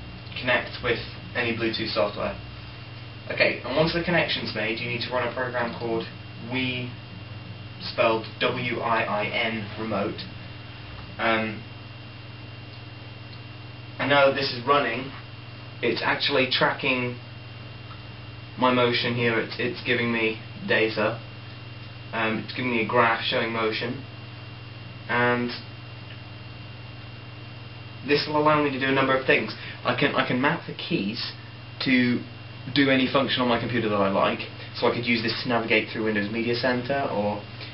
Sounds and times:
Speech: 0.3s - 2.4s, 3.3s - 7.0s, 7.8s - 10.3s, 11.2s - 11.7s, 14.0s - 15.2s, 15.8s - 17.2s, 18.6s - 21.2s, 22.1s - 24.1s, 25.1s - 25.7s, 28.0s - 37.5s.

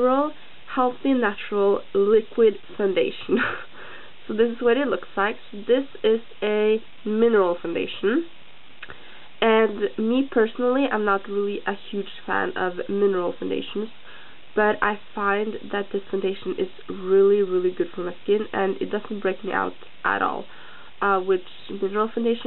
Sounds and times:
Speech: 0.0s - 3.6s, 4.3s - 8.3s, 9.4s - 14.0s, 14.6s - 22.4s.

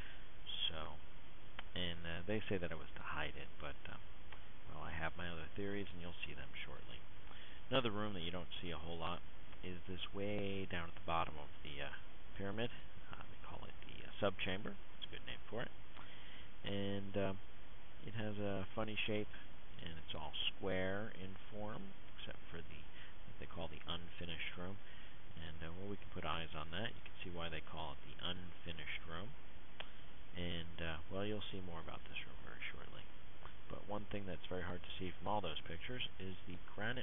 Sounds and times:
Speech: 0.5s - 1.0s, 1.7s - 4.1s, 4.7s - 7.0s, 7.7s - 15.8s, 16.6s - 17.4s, 18.0s - 24.8s, 25.4s - 29.4s, 30.4s - 33.1s, 33.7s - 37.0s.

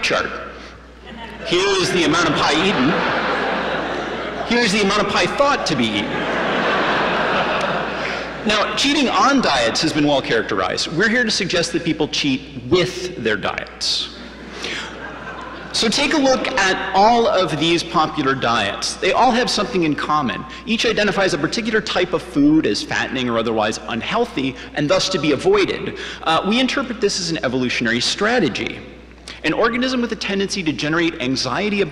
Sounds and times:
Speech: 0.0s - 0.5s, 1.2s - 3.1s, 4.4s - 6.2s, 8.4s - 14.2s, 15.7s - 31.9s.

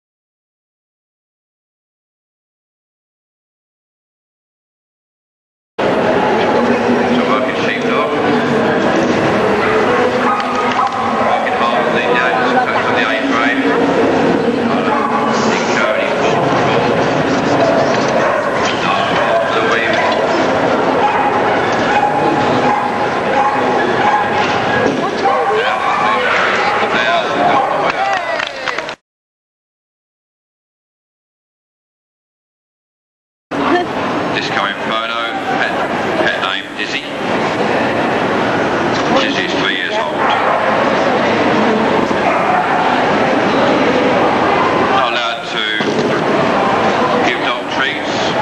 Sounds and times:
Speech: 6.1s - 20.4s, 24.8s - 29.0s, 33.6s - 37.2s, 39.0s - 40.5s, 43.6s - 48.4s.

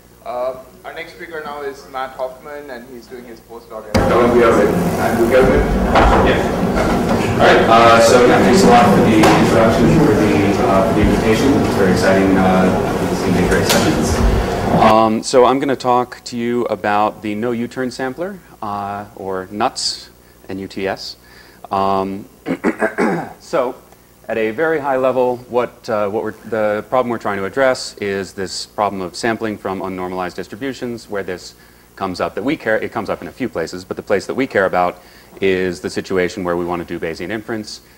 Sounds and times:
Speech: 0.2s - 6.6s, 7.4s - 22.3s, 23.4s - 37.9s.

